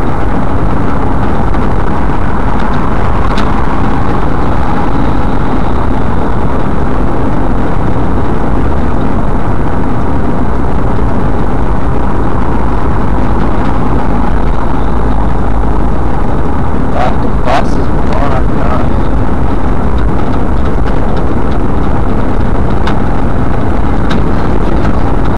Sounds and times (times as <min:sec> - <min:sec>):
Vehicle: 0:00.0 - 0:25.3
Speech: 0:17.0 - 0:19.0.